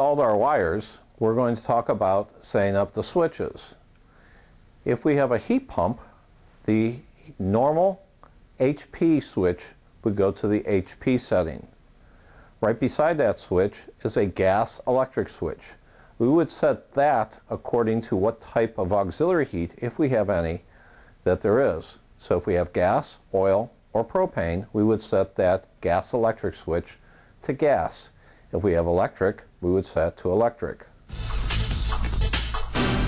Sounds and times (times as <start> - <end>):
Speech: 0.0 - 3.8, 4.8 - 11.8, 12.6 - 31.0.